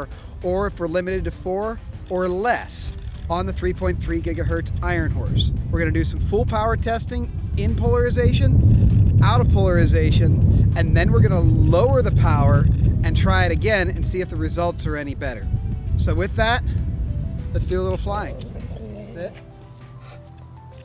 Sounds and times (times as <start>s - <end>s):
Music: 0.0s - 20.8s
Speech: 0.5s - 8.5s, 9.2s - 15.4s, 17.6s - 19.4s.